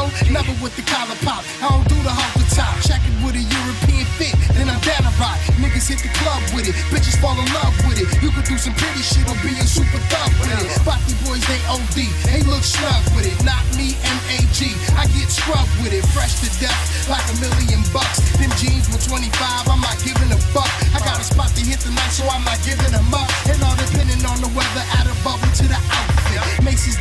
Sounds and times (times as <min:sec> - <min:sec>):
Disco: 0:00.0 - 0:27.0
Soul music: 0:00.0 - 0:27.0.